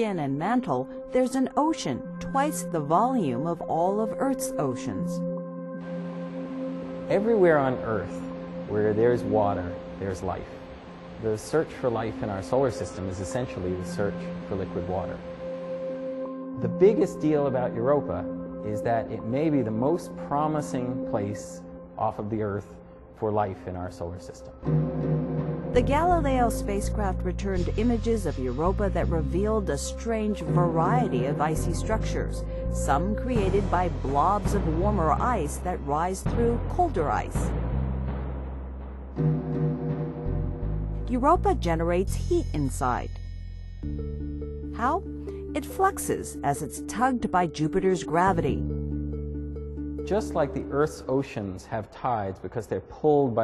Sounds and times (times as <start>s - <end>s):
Speech: 0.0s - 5.2s, 7.1s - 10.5s, 11.2s - 15.2s, 16.6s - 24.6s, 25.8s - 37.5s, 41.1s - 43.1s, 44.8s - 45.0s, 45.6s - 48.6s, 50.1s - 53.4s
Music: 0.0s - 53.4s.